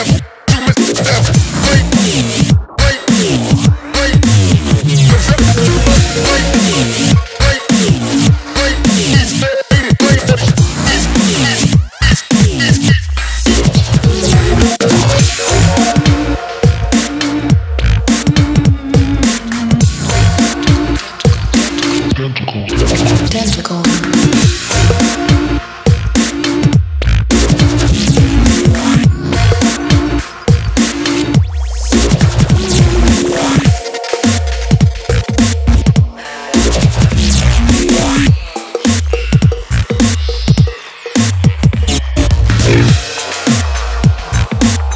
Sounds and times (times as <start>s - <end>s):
Sound effect: 0.0s - 44.9s.